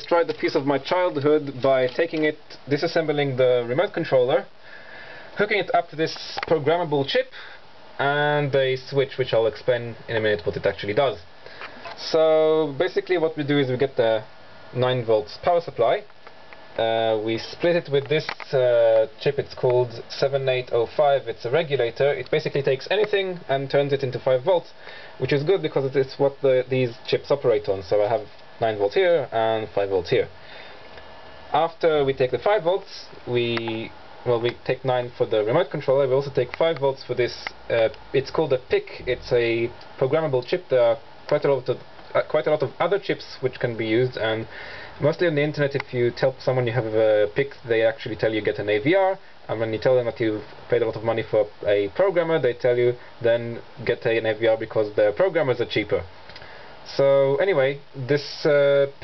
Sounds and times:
Speech: 0:00.0 - 0:04.6, 0:05.4 - 0:16.2, 0:16.8 - 0:30.4, 0:31.5 - 0:56.1, 0:56.8 - 0:59.0.

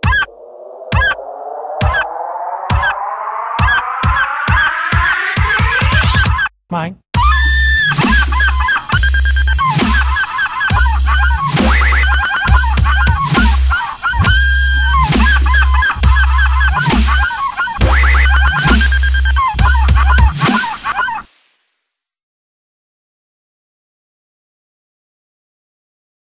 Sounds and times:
Dubstep: 0:00.0 - 0:06.4, 0:07.2 - 0:21.3.

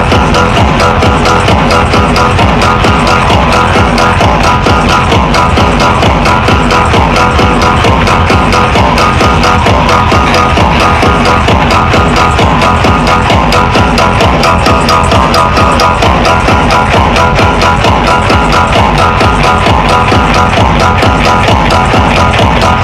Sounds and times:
Music: 0:00.0 - 0:22.8.

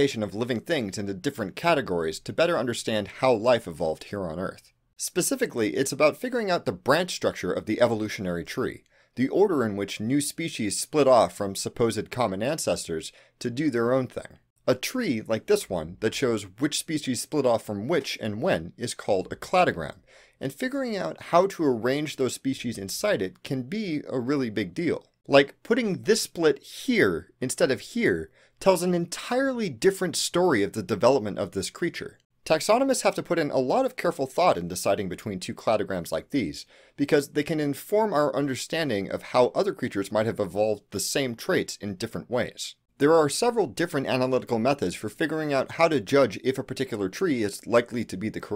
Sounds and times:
Speech: 0:00.0 - 0:48.5.

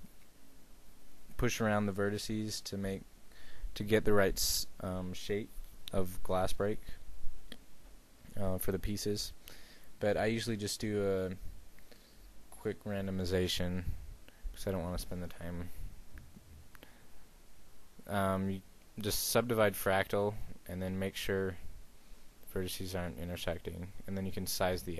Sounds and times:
Speech: 0:01.4 - 0:03.1, 0:03.8 - 0:07.0, 0:08.3 - 0:09.4, 0:10.0 - 0:11.5, 0:12.5 - 0:15.8, 0:18.0 - 0:21.7, 0:22.5 - 0:24.9.

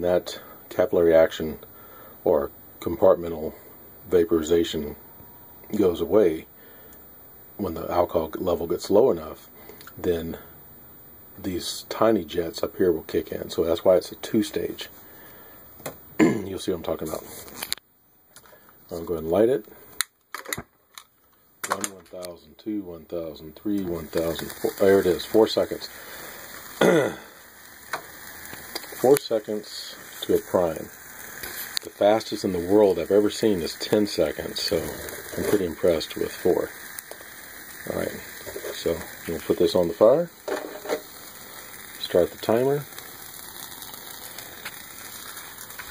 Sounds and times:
Speech: 0:00.0 - 0:01.6, 0:02.2 - 0:05.0, 0:05.7 - 0:06.5, 0:07.6 - 0:10.5, 0:11.4 - 0:15.0, 0:16.2 - 0:17.4, 0:18.9 - 0:19.7, 0:21.6 - 0:25.9, 0:29.0 - 0:30.9, 0:31.8 - 0:36.8, 0:37.8 - 0:40.4, 0:42.0 - 0:42.9
Sizzle: 0:22.1 - 0:45.9.

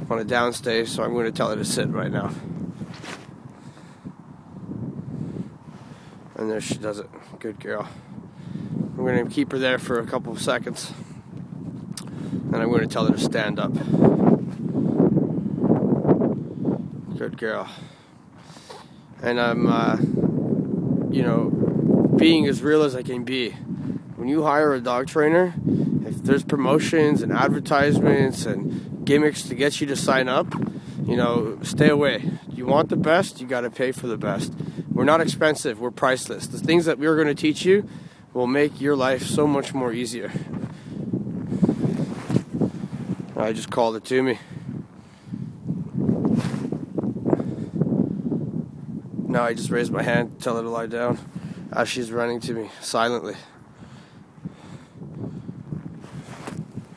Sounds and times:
Speech: 0:00.0 - 0:02.4, 0:06.4 - 0:08.0, 0:09.0 - 0:11.0, 0:12.5 - 0:13.8, 0:17.2 - 0:17.8, 0:19.2 - 0:20.1, 0:21.1 - 0:21.5, 0:22.2 - 0:23.6, 0:24.2 - 0:30.5, 0:31.1 - 0:37.8, 0:38.4 - 0:40.4, 0:43.4 - 0:44.4, 0:49.3 - 0:53.5.

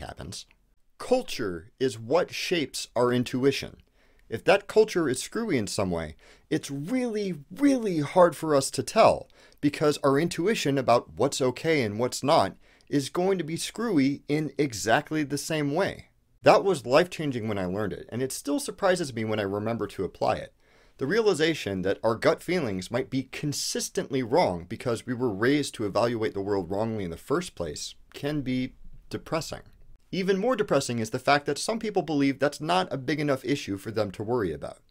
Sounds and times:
Speech: 0:00.0 - 0:34.9.

